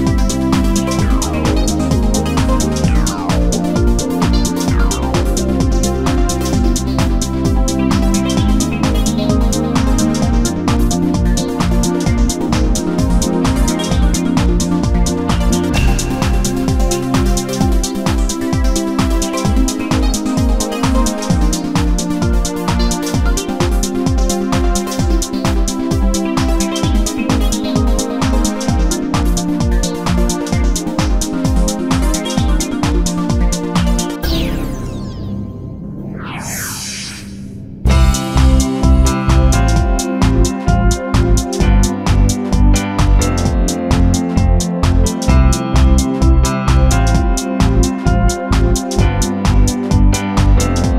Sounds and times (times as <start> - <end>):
Music: 0.0 - 50.9.